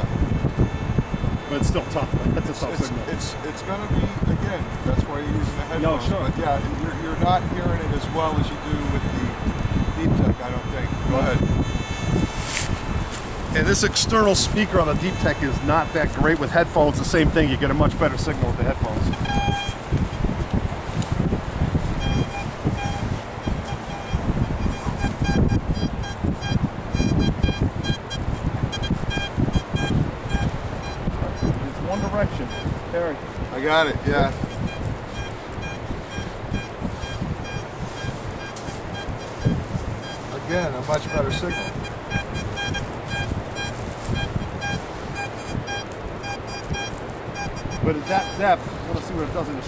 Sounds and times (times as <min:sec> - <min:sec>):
Outside, rural or natural: 0:00.0 - 0:49.6
Speech: 0:01.5 - 0:09.4, 0:10.0 - 0:11.5, 0:13.6 - 0:19.1, 0:31.2 - 0:34.4, 0:40.3 - 0:41.8, 0:47.8 - 0:49.6.